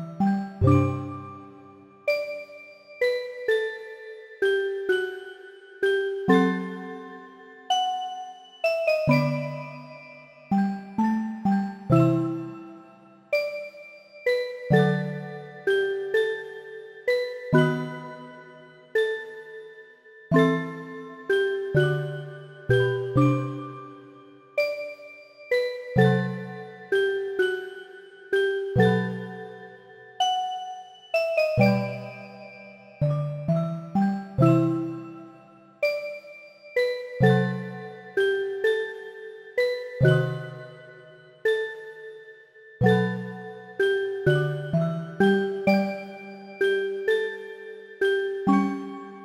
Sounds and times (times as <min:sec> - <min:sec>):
Music: 0:00.0 - 0:49.2.